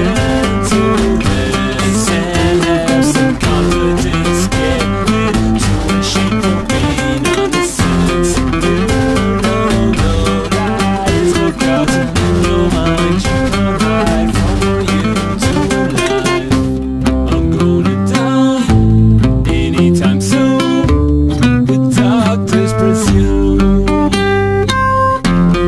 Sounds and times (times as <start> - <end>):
Acoustic guitar: 0.0 - 25.6
Independent music: 0.0 - 25.6.